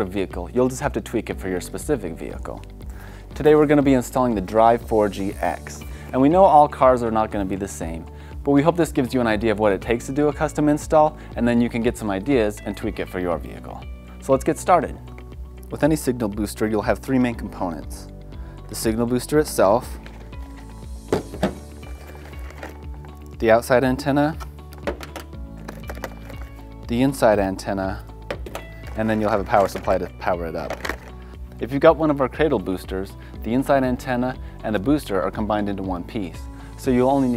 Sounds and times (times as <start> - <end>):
Speech: 0.0 - 2.6, 3.4 - 15.0, 15.7 - 18.1, 18.7 - 20.0, 23.4 - 24.4, 26.9 - 28.0, 29.0 - 30.8, 31.6 - 37.3
Music: 0.0 - 37.3.